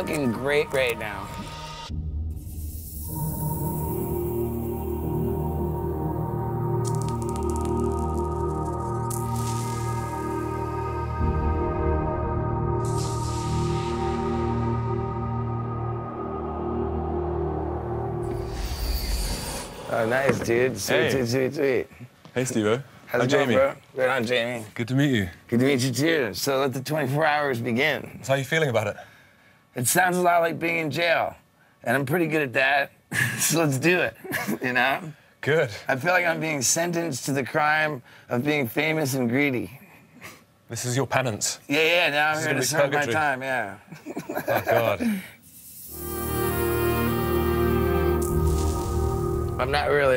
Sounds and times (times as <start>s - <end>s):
Music: 0.0s - 20.4s, 45.9s - 50.1s
Speech: 19.9s - 29.0s, 29.8s - 39.8s, 40.7s - 43.8s.